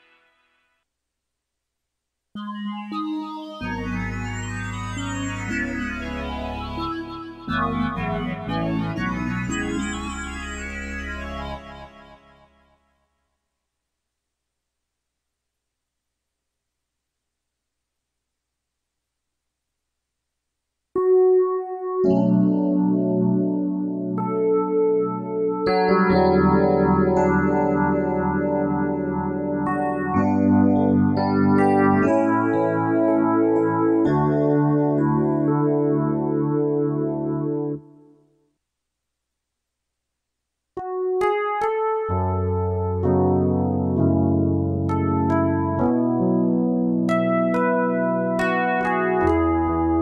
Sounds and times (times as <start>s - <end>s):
Inside, small room: 0.0s - 50.0s
Piano: 2.4s - 12.8s, 21.0s - 38.2s, 40.8s - 50.0s.